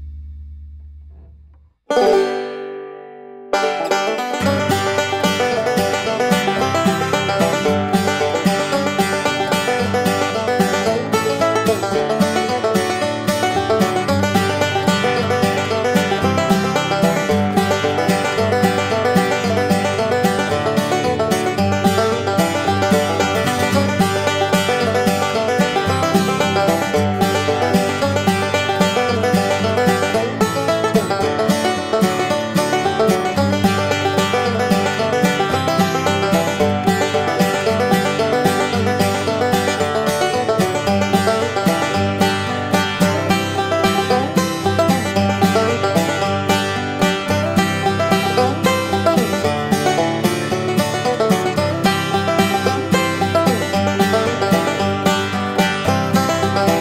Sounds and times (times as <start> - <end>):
Music: 0.0 - 56.8.